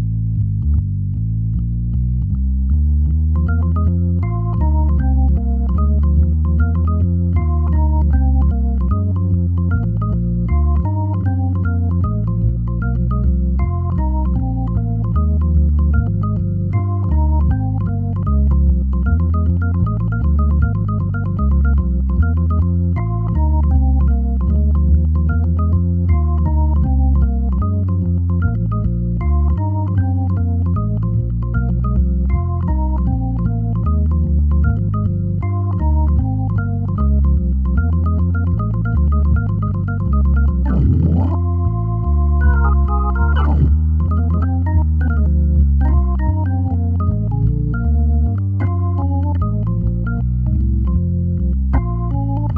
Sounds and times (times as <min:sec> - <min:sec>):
Electronic organ: 0:00.0 - 0:52.5.